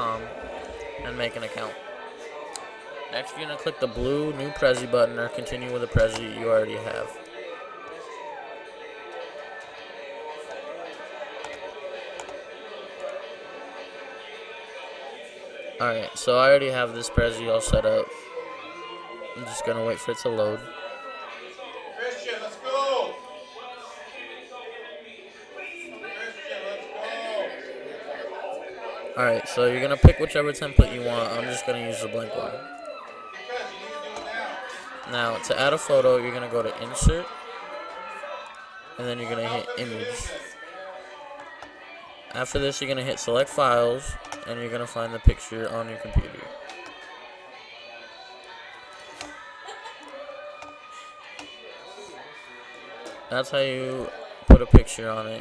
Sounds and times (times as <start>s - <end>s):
Speech: 0.0s - 7.2s, 15.8s - 20.8s, 21.4s - 32.8s, 33.4s - 38.4s, 39.0s - 41.3s, 42.3s - 48.1s, 53.2s - 55.4s.